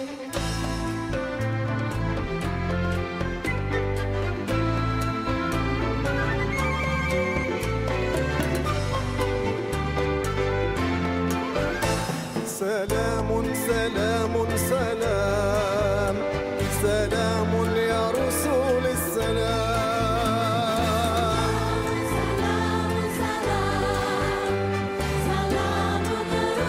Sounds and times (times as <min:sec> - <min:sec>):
Orchestra: 0:00.0 - 0:26.6.